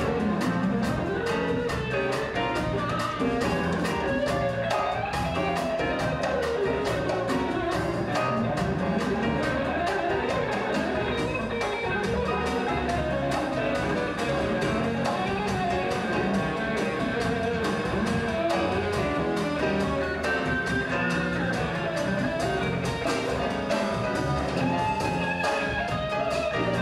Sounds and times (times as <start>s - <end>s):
Acoustic guitar: 0.0s - 26.8s.